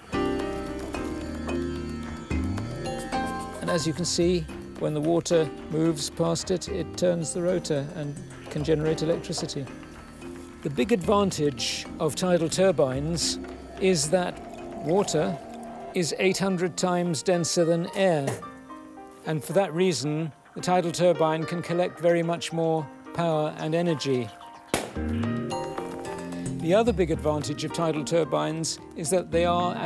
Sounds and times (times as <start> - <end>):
Music: 0.0 - 29.8
Speech: 3.6 - 9.7, 10.6 - 14.3, 14.9 - 15.4, 16.0 - 18.4, 19.3 - 24.4, 26.6 - 29.8.